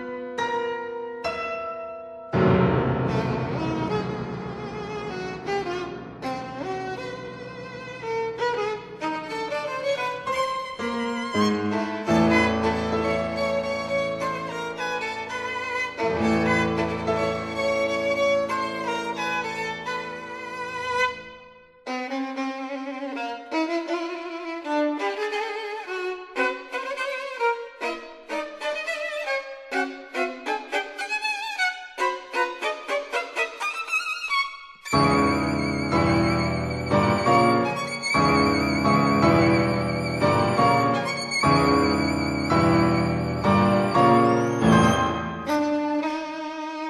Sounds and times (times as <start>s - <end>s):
Violin, fiddle: 2.8s - 46.9s.